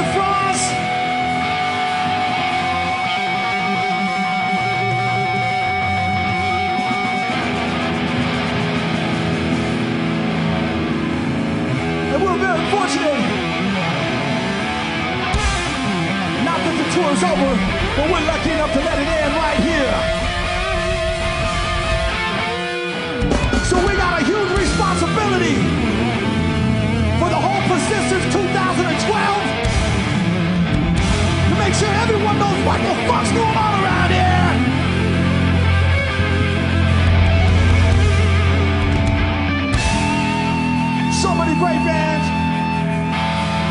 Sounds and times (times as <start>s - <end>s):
Speech: 0.0s - 0.8s, 12.1s - 13.4s, 16.4s - 20.1s, 23.6s - 25.7s, 27.2s - 29.6s, 31.5s - 34.7s, 41.1s - 42.4s
Music: 0.0s - 43.7s.